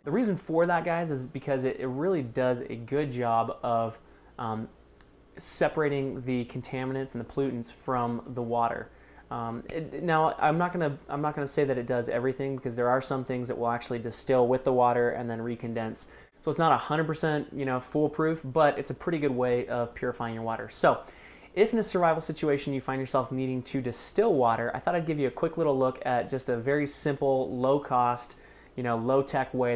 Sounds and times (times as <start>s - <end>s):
Speech: 0.0s - 4.8s, 5.4s - 29.7s.